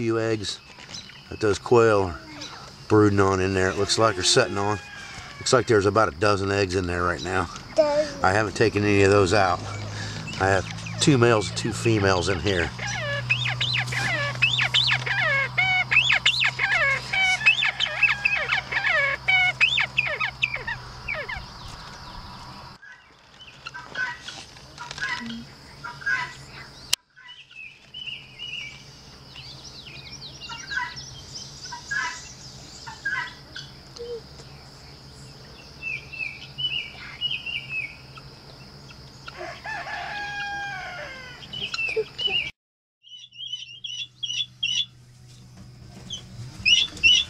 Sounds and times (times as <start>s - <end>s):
Cricket: 0.0s - 42.5s
Chirp, tweet: 0.4s - 1.6s, 26.1s - 39.3s, 41.4s - 45.4s.